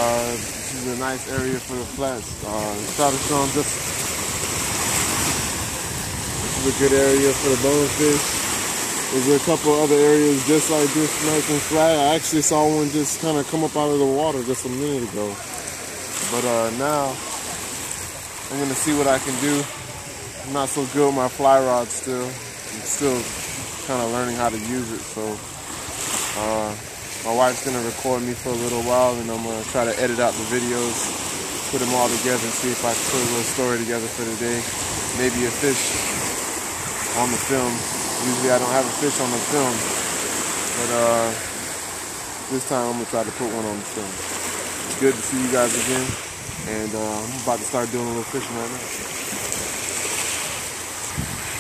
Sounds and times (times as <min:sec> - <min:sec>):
Speech: 0:00.0 - 0:03.8, 0:06.6 - 0:08.3, 0:09.1 - 0:17.4, 0:18.5 - 0:25.4, 0:26.4 - 0:31.0, 0:31.7 - 0:36.0, 0:37.2 - 0:39.9, 0:40.8 - 0:41.5, 0:42.5 - 0:44.2, 0:44.9 - 0:48.8
Ocean: 0:00.0 - 0:51.6.